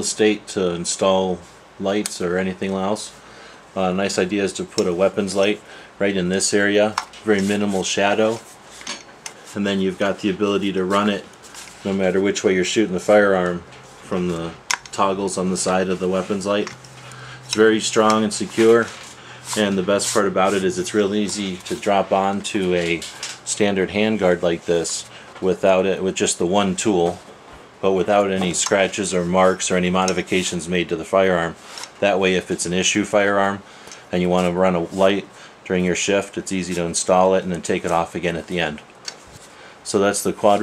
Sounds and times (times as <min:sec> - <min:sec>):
Speech: 0:00.0 - 0:03.2, 0:03.8 - 0:08.5, 0:09.5 - 0:16.8, 0:17.5 - 0:27.2, 0:27.8 - 0:38.9, 0:39.8 - 0:40.6.